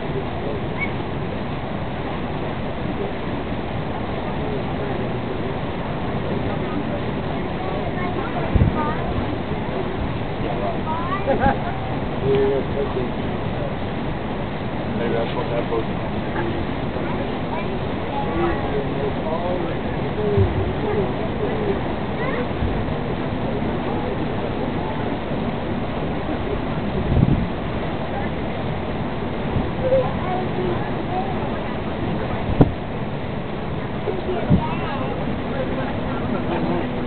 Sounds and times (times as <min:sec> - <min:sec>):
Speech: 0:06.2 - 0:09.4, 0:14.9 - 0:22.8, 0:29.7 - 0:32.5, 0:34.0 - 0:37.0.